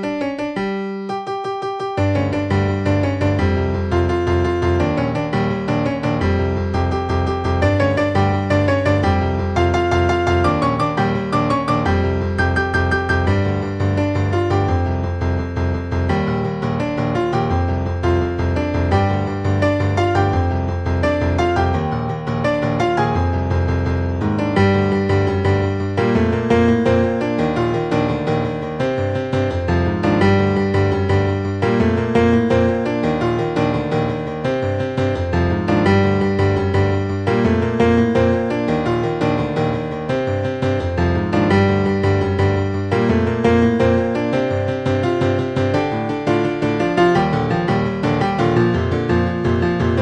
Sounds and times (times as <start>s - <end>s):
Music: 0.0s - 50.0s.